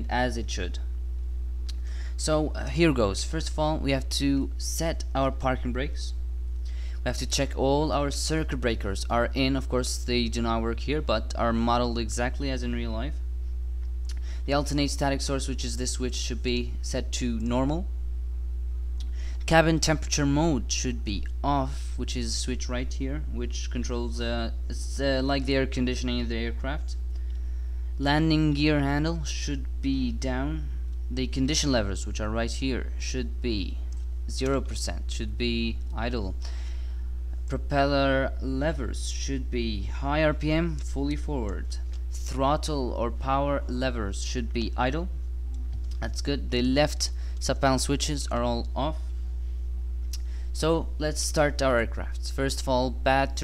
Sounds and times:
Speech: 0.0s - 0.9s, 2.2s - 6.2s, 7.0s - 13.2s, 14.4s - 17.9s, 19.4s - 27.0s, 28.0s - 36.4s, 37.5s - 45.2s, 45.9s - 49.1s, 50.6s - 53.4s.

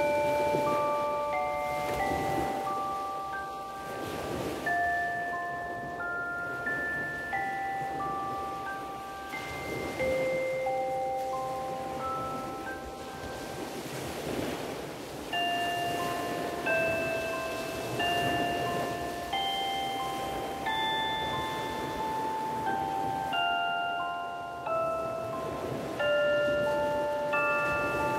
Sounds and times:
Marimba, xylophone: 0.0s - 14.5s, 15.2s - 28.1s
Chime: 0.0s - 28.1s
Glockenspiel: 0.0s - 28.1s.

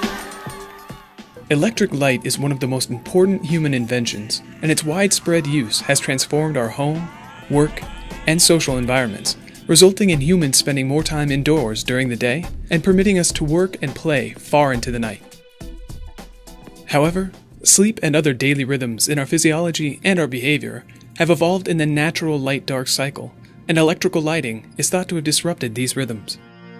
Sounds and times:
Music: 0.0s - 26.7s
Speech: 1.4s - 15.2s, 16.9s - 26.4s.

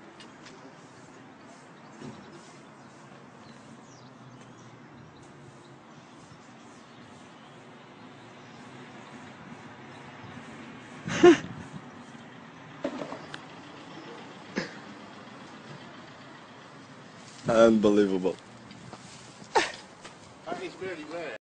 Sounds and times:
Speech: 17.5s - 18.4s, 20.5s - 21.4s.

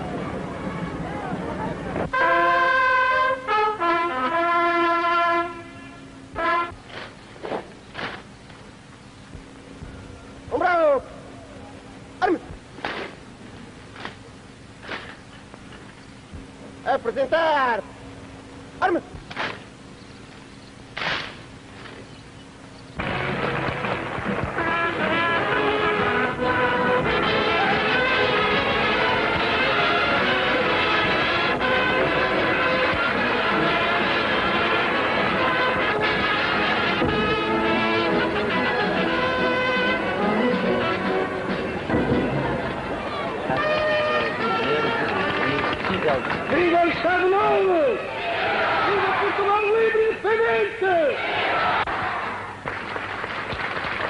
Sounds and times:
Male speech, man speaking: 10.5s - 11.1s, 16.8s - 17.9s, 18.8s - 19.1s, 43.5s - 48.0s, 48.9s - 51.2s.

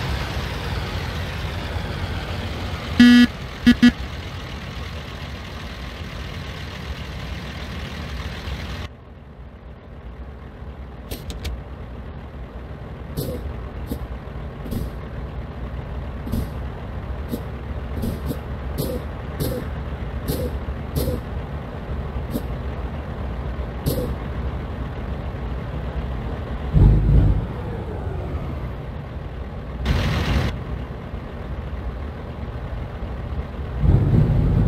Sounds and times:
Truck: 0.0s - 34.6s.

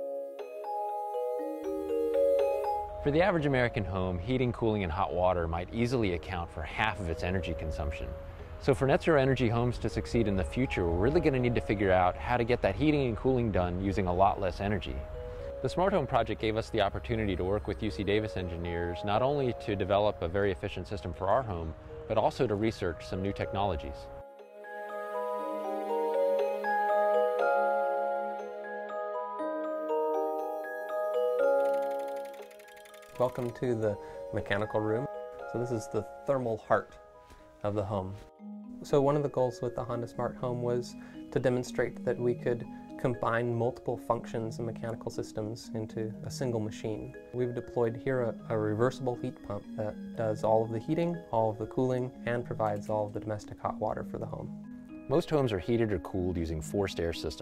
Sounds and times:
Glockenspiel: 0.0s - 57.4s
Speech: 3.0s - 15.0s, 15.6s - 24.1s, 33.2s - 36.9s, 37.6s - 38.2s, 38.8s - 54.5s, 55.1s - 57.4s.

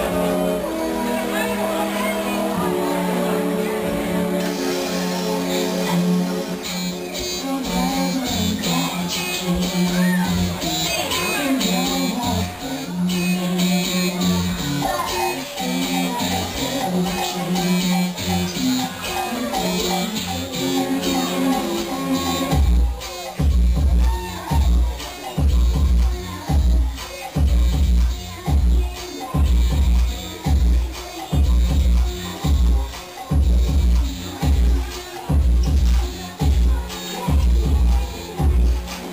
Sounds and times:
Inside, large room or hall: 0.0s - 39.1s
Music: 0.0s - 39.1s.

